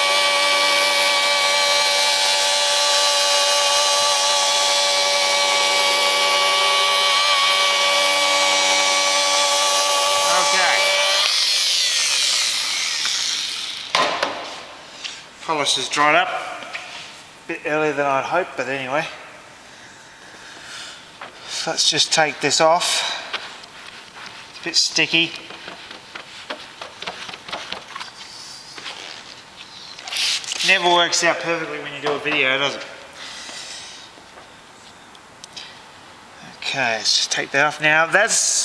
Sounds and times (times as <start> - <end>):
Speech: 10.2 - 11.0, 15.4 - 16.6, 17.5 - 19.3, 21.5 - 23.2, 24.6 - 25.4, 30.6 - 33.0, 36.4 - 38.6.